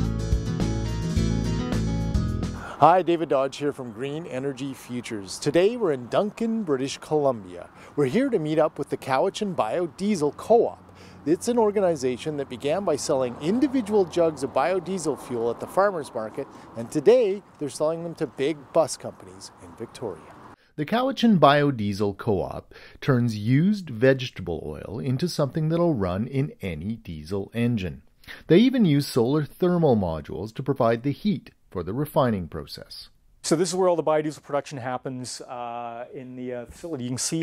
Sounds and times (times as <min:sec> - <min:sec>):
Speech: 0:02.8 - 0:37.4.